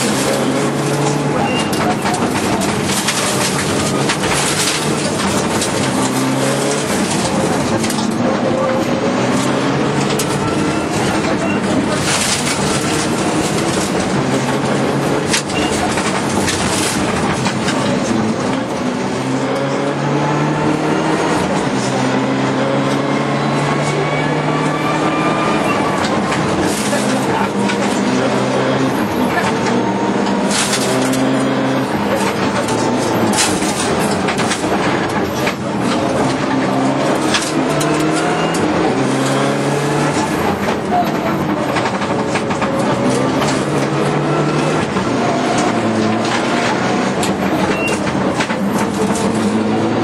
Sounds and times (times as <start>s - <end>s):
Car: 0.0s - 50.0s.